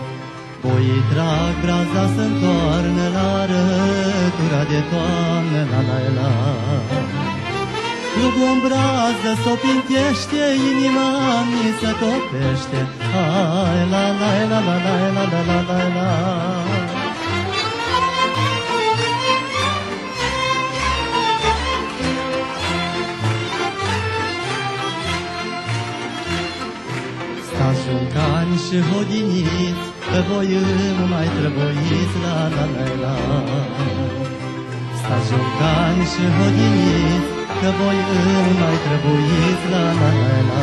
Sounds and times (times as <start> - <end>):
Music: 0.0 - 40.6.